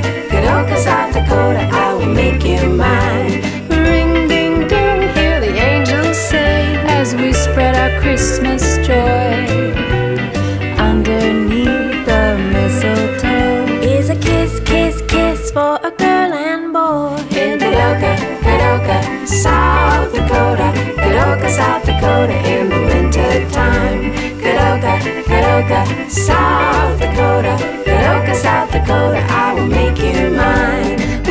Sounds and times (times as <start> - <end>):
Rhythm and blues: 0.0 - 31.3.